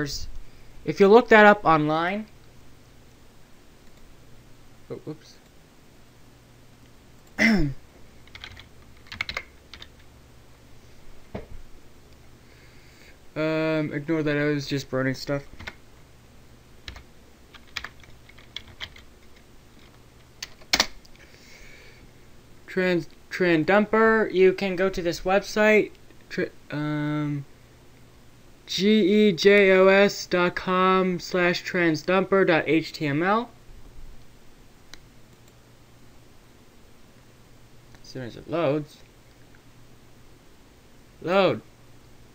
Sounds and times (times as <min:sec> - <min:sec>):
Computer keyboard: 0:08.3 - 0:10.1, 0:16.9 - 0:20.9.